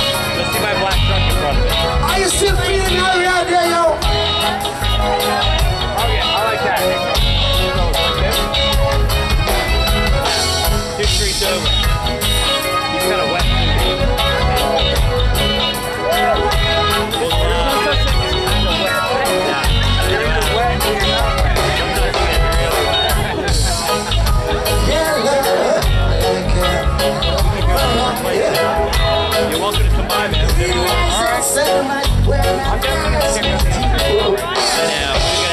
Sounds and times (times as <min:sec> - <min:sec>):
Speech: 0:00.0 - 0:09.3, 0:10.8 - 0:35.5
Music: 0:00.0 - 0:35.5.